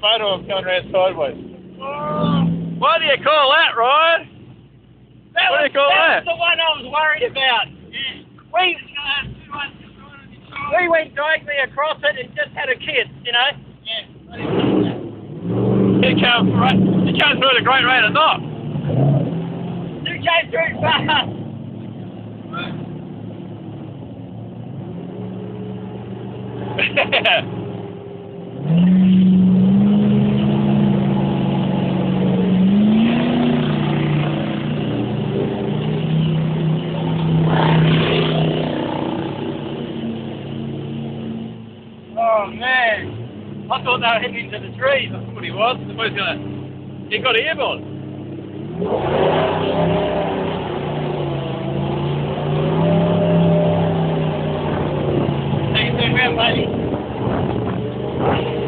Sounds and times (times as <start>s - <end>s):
Motorboat, speedboat: 0.0s - 4.2s, 14.3s - 58.6s
Speech: 0.0s - 4.3s, 5.4s - 14.5s, 16.0s - 18.4s, 20.1s - 21.3s, 22.5s - 22.8s, 42.2s - 43.1s, 43.7s - 46.4s, 47.1s - 47.8s, 55.8s - 56.7s.